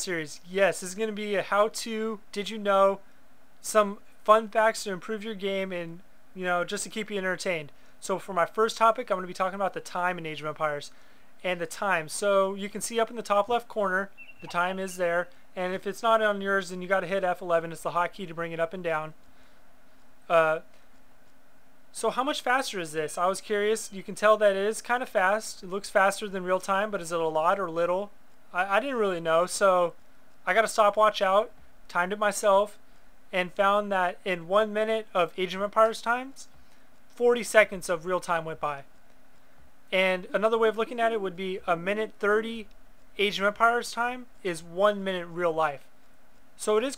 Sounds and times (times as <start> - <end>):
Speech: 0.0 - 3.0, 3.6 - 19.2, 20.3 - 20.7, 21.9 - 36.5, 37.1 - 38.9, 39.9 - 45.9, 46.6 - 46.9.